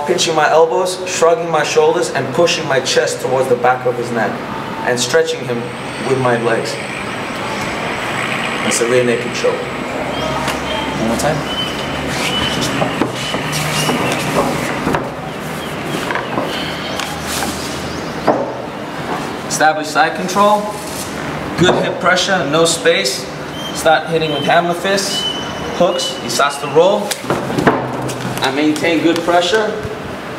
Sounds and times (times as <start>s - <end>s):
Speech: 0.0s - 6.8s, 8.6s - 9.7s, 11.0s - 11.5s, 19.5s - 20.8s, 21.6s - 25.2s, 25.8s - 27.1s, 28.4s - 30.0s
Inside, large room or hall: 0.0s - 30.3s.